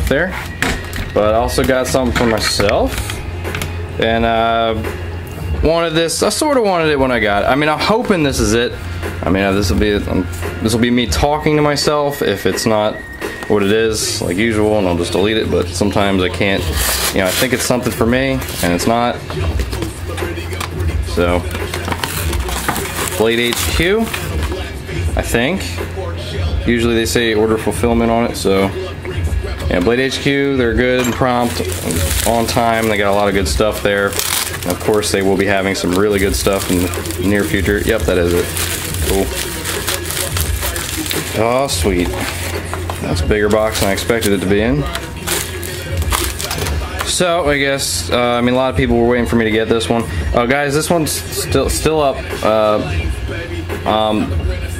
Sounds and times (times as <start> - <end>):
Speech: 0.0 - 0.4, 1.2 - 3.0, 4.0 - 4.9, 5.6 - 19.3, 21.1 - 21.5, 23.0 - 24.2, 25.2 - 25.9, 26.6 - 28.8, 29.7 - 42.3, 43.0 - 45.0, 47.0 - 53.0, 53.8 - 54.4
Music: 0.0 - 54.7.